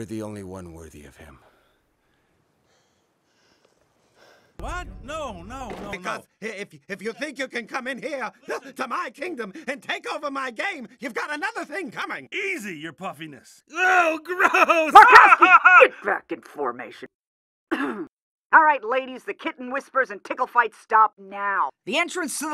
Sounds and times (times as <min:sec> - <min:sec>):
Speech: 0:00.0 - 0:01.4, 0:04.6 - 0:15.0.